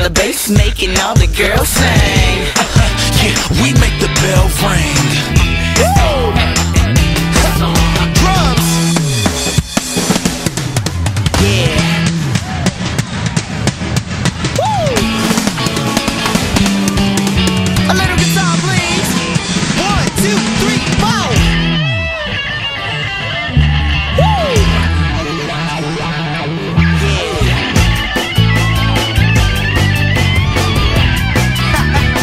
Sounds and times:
Drum kit: 0:00.0 - 0:22.1, 0:24.2 - 0:25.0, 0:26.8 - 0:32.2.

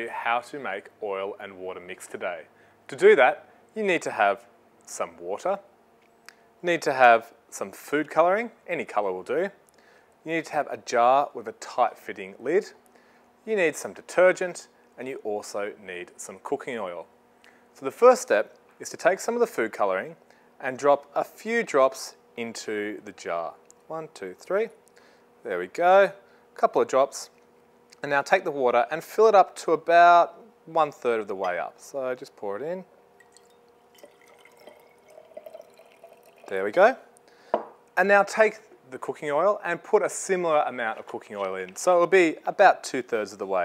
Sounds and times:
Speech: 0:00.0 - 0:05.7, 0:06.6 - 0:09.6, 0:10.3 - 0:12.8, 0:13.5 - 0:17.1, 0:17.8 - 0:24.8, 0:25.4 - 0:27.4, 0:28.0 - 0:32.9, 0:36.5 - 0:37.1, 0:38.0 - 0:43.6.

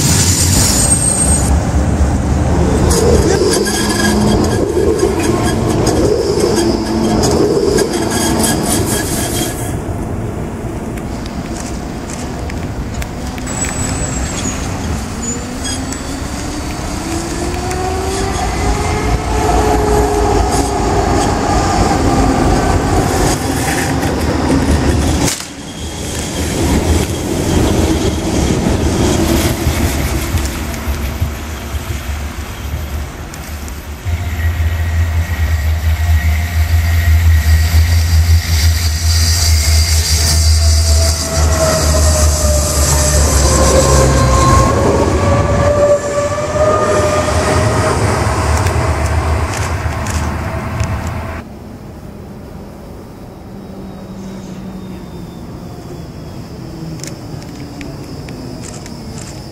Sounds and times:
Railroad car, train wagon: 0:00.0 - 0:59.5
Train: 0:00.0 - 0:59.5.

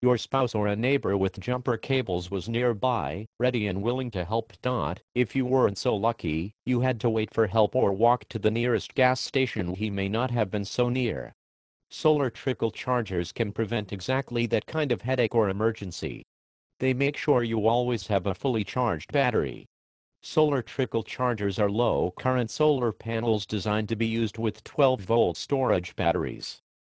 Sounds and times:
Speech: 0:00.0 - 0:26.7.

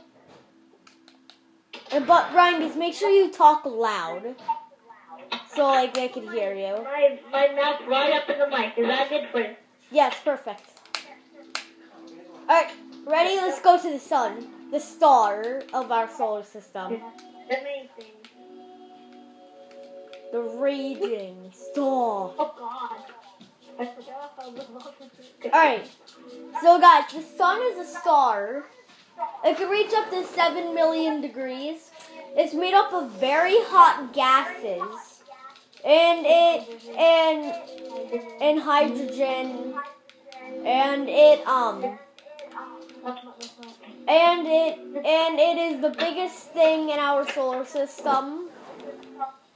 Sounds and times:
Music: 0:00.0 - 0:03.8, 0:10.6 - 0:28.6, 0:29.4 - 0:35.0, 0:35.6 - 0:49.5
Speech: 0:02.0 - 0:18.3, 0:26.6 - 0:49.4.

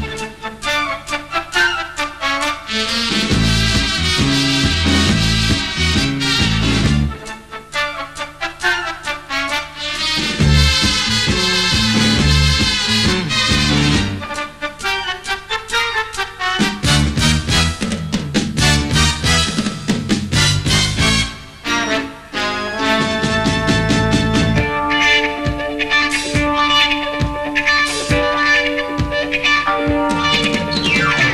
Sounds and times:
Music: 0:00.0 - 0:31.3.

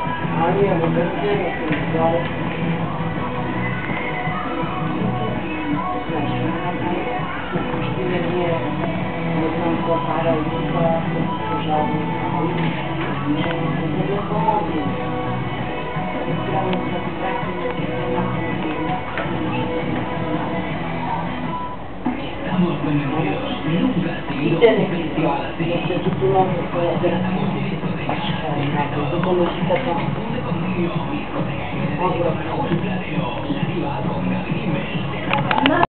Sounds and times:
Music: 0:00.0 - 0:35.8
Speech: 0:00.3 - 0:02.4, 0:07.9 - 0:15.0, 0:22.1 - 0:34.4, 0:35.4 - 0:35.8.

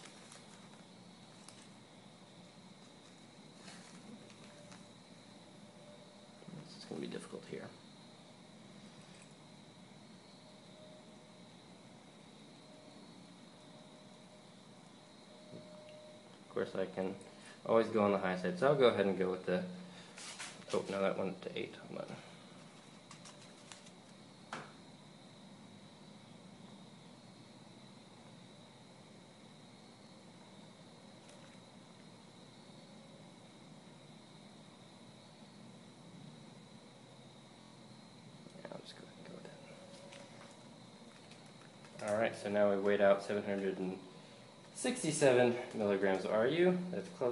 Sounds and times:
Inside, small room: 0:00.0 - 0:47.3
Speech: 0:06.5 - 0:07.8, 0:16.5 - 0:19.8, 0:20.7 - 0:22.3, 0:38.6 - 0:39.6, 0:42.0 - 0:44.0, 0:44.8 - 0:47.3.

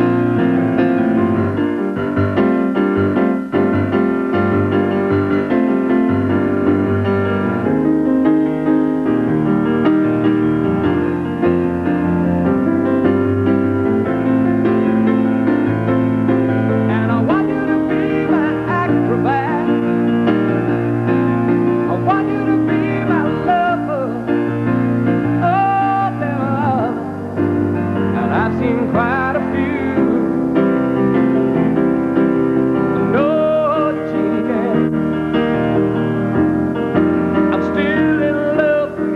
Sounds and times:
Piano: 0:00.0 - 0:39.1.

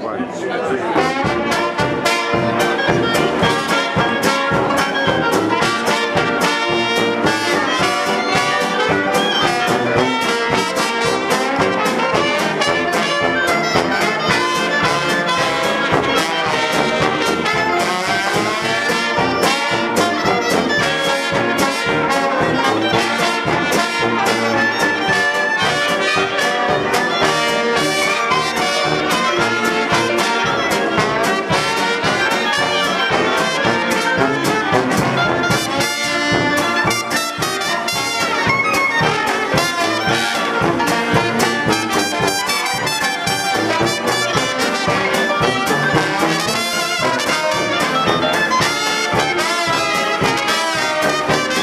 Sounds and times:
Swing music: 0:00.0 - 0:51.6.

